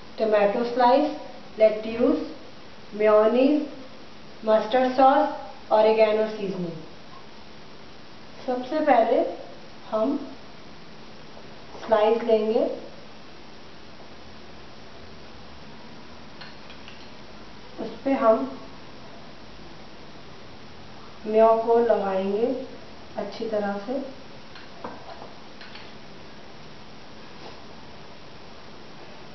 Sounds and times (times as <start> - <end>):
Speech: 0.2 - 2.4, 3.0 - 3.8, 4.4 - 6.9, 8.4 - 10.4, 11.8 - 12.9, 17.8 - 18.7, 21.2 - 24.2.